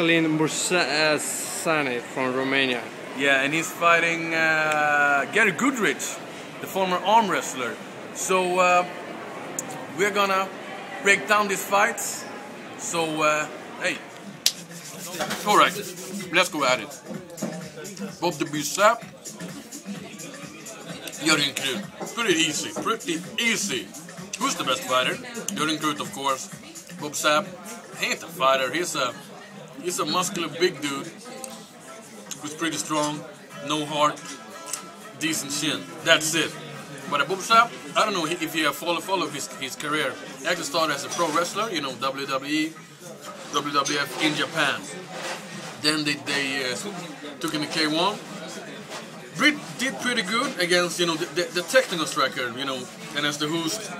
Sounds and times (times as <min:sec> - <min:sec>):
Speech: 0:00.0 - 0:09.0, 0:09.6 - 0:14.1, 0:14.9 - 0:53.9
Inside, public space: 0:00.0 - 0:53.9.